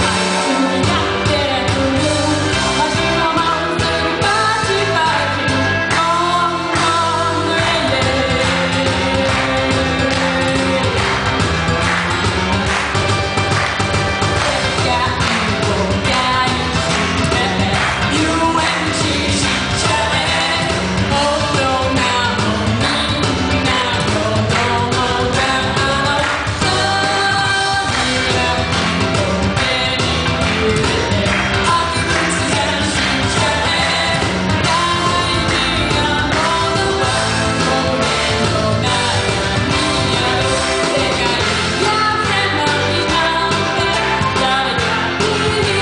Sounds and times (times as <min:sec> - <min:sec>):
Female singing: 0:00.0 - 0:11.1, 0:14.4 - 0:45.8
Music: 0:00.0 - 0:45.8.